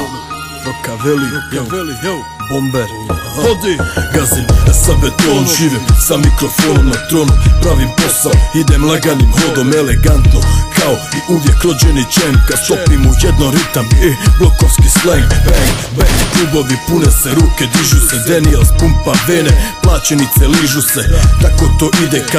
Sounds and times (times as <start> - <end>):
Music: 0.0 - 22.3.